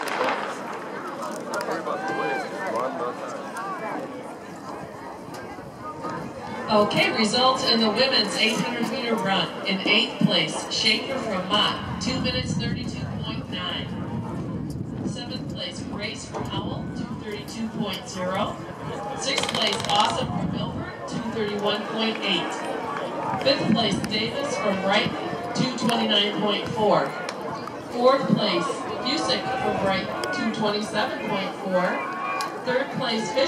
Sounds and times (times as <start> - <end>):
Run: 0.0 - 7.0, 11.7 - 33.4
Outside, urban or manmade: 0.0 - 33.4
Speech: 5.9 - 14.0, 15.1 - 18.6, 19.2 - 22.7, 23.4 - 32.0, 32.7 - 33.4.